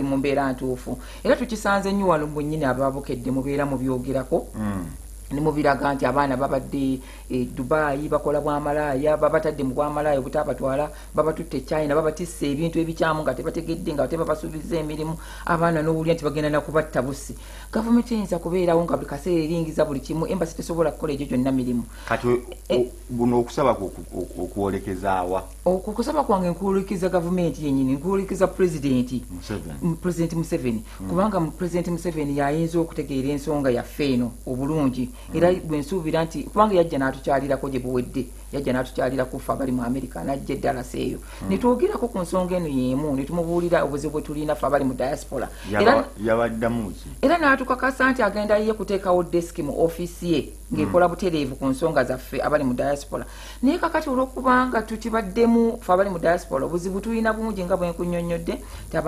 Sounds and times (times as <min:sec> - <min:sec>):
Inside, small room: 0:00.0 - 0:59.0
Speech: 0:00.0 - 0:59.0.